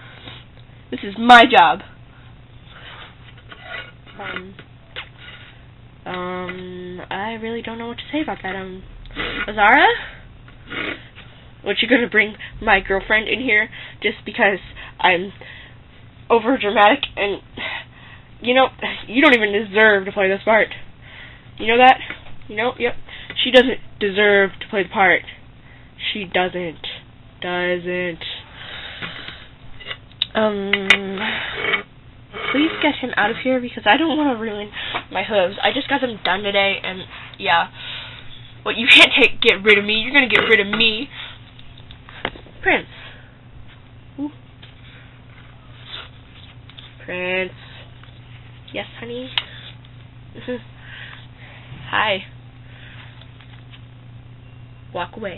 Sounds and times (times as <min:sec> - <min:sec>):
Inside, small room: 0:00.0 - 0:55.3.